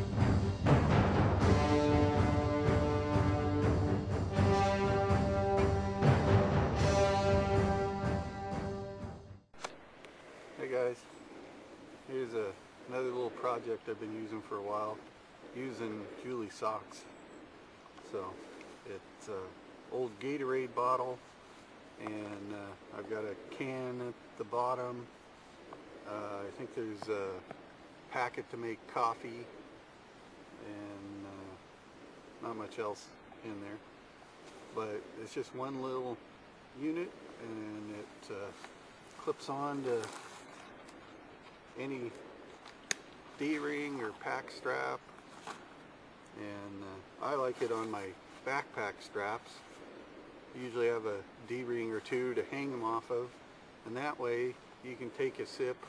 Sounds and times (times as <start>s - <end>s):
Speech: 10.6s - 11.1s, 12.1s - 15.0s, 15.6s - 17.1s, 18.1s - 21.2s, 22.0s - 25.1s, 26.1s - 27.4s, 28.1s - 29.5s, 30.6s - 31.6s, 32.4s - 33.8s, 34.8s - 36.2s, 36.8s - 38.6s, 39.2s - 40.2s, 41.8s - 42.2s, 43.4s - 45.0s, 46.4s - 49.7s, 50.6s - 55.8s.